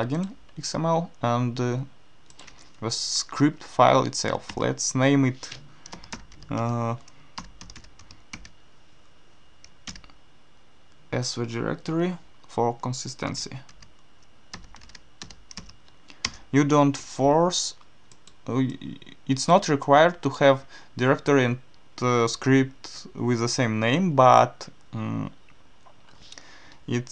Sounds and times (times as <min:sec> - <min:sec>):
Speech: 0:00.0 - 0:02.0, 0:02.8 - 0:05.6, 0:06.5 - 0:07.0, 0:11.1 - 0:13.7, 0:16.5 - 0:17.8, 0:18.5 - 0:25.4, 0:26.9 - 0:27.1
Computer keyboard: 0:05.8 - 0:08.6, 0:13.7 - 0:16.4.